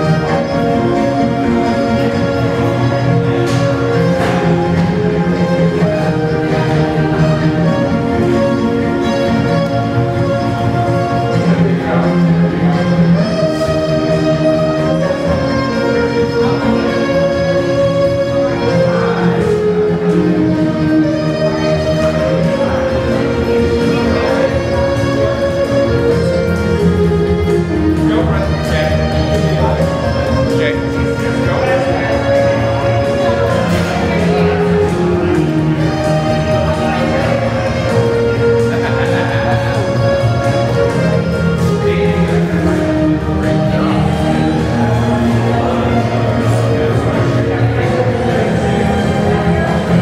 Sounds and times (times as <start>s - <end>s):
Music: 0.0s - 50.0s
Speech: 11.3s - 13.8s, 18.3s - 26.0s, 27.9s - 50.0s.